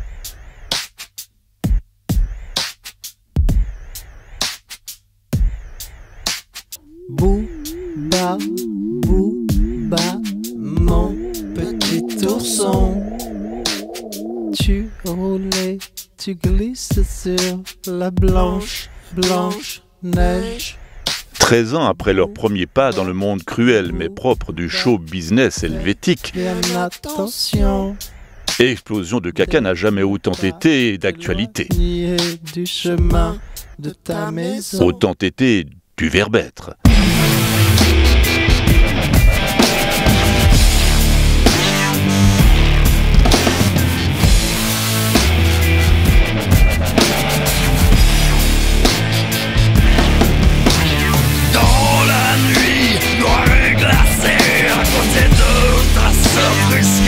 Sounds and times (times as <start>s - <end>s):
Music: 0.0s - 21.4s, 25.6s - 28.6s, 31.6s - 33.8s, 36.9s - 57.0s
Speech: 6.8s - 15.7s, 16.3s - 20.8s, 21.4s - 28.0s, 28.6s - 36.9s, 51.5s - 57.0s.